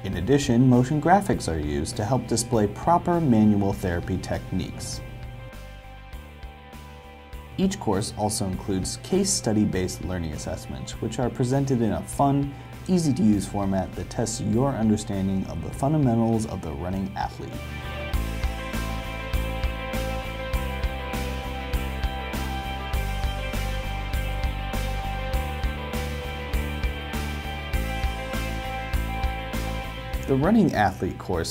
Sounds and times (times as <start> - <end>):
Speech: 0.0 - 5.0, 7.6 - 17.6, 30.3 - 31.5
Music: 0.0 - 31.5.